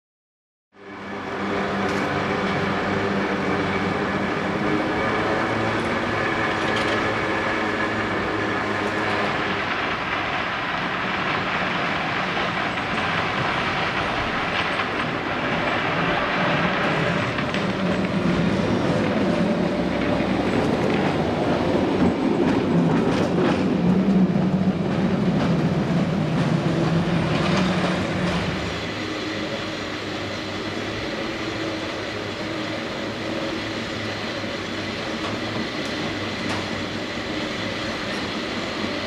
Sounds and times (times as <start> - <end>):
Outside, urban or manmade: 0.7 - 39.0
Vehicle: 0.8 - 39.0.